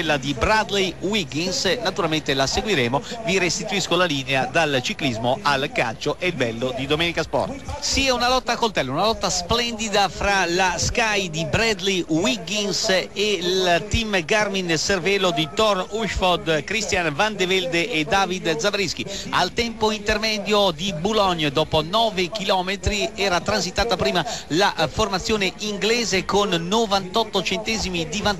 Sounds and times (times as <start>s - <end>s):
Speech: 0.0s - 28.3s.